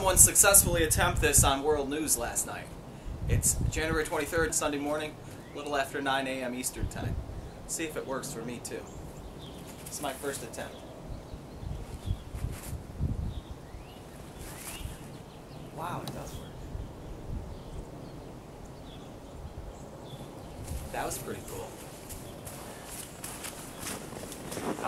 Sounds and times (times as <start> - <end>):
Speech: 3.3 - 8.9, 9.9 - 10.8, 15.8 - 16.5, 20.9 - 21.8.